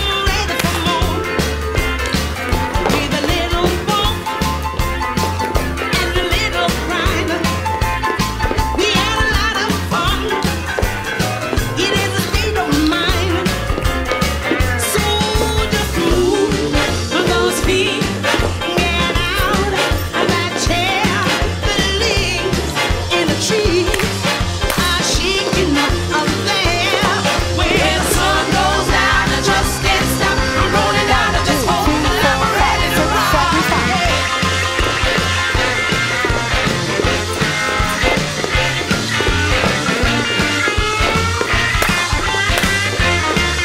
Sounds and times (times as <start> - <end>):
Music: 0.0 - 43.6.